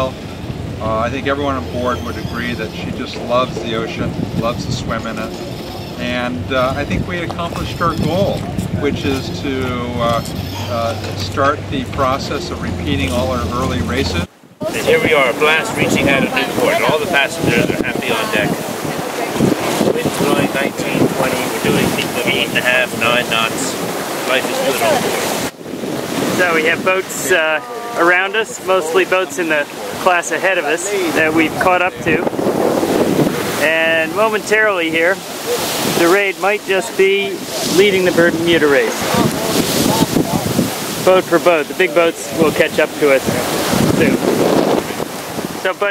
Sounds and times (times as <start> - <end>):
Sailboat, sailing ship: 0.0 - 45.9
Speech: 0.8 - 5.4, 6.0 - 25.2, 26.4 - 32.3, 33.6 - 35.2, 36.0 - 40.5, 41.1 - 44.2, 45.6 - 45.9.